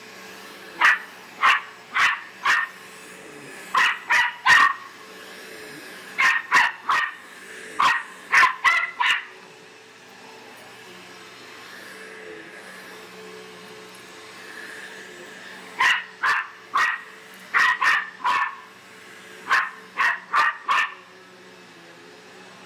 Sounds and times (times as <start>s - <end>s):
Bark: 0.8s - 2.7s, 3.8s - 4.9s, 6.2s - 7.2s, 7.8s - 9.3s, 15.8s - 18.7s, 19.5s - 21.0s.